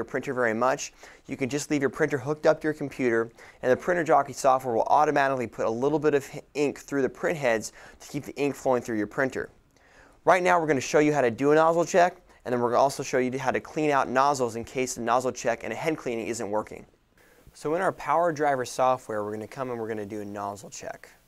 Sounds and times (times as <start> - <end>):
Speech: 0.0 - 9.6, 10.2 - 16.9, 17.6 - 21.2.